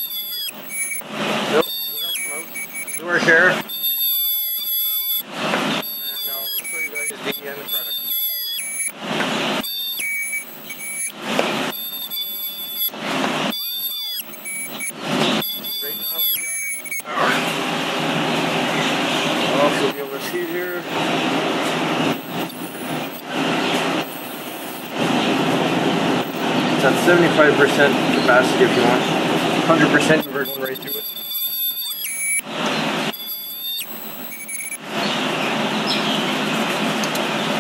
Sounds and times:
Squeal: 0.0 - 9.0, 9.6 - 17.4, 19.4 - 21.0, 22.0 - 25.3, 26.2 - 27.4, 29.7 - 35.2.

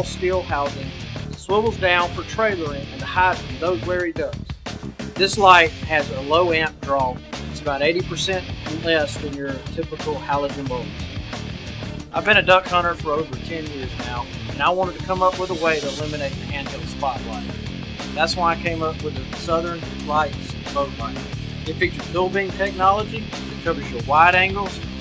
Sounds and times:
Speech: 0.0 - 4.4, 5.2 - 11.0, 12.2 - 17.5, 18.2 - 25.0
Music: 0.0 - 25.0.

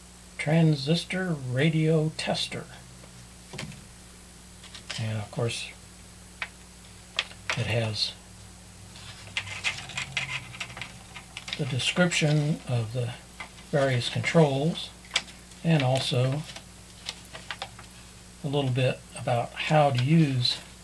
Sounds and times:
Speech: 0.4 - 2.8, 4.9 - 5.8, 7.5 - 8.2, 11.6 - 15.0, 15.6 - 16.5, 18.4 - 20.7.

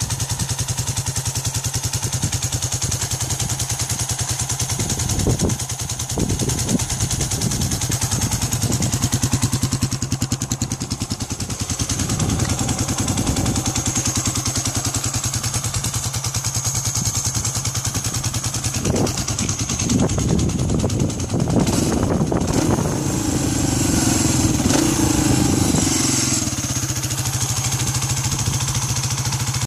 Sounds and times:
Vehicle: 0.0 - 29.6
Accelerating, revving, vroom: 21.7 - 26.4.

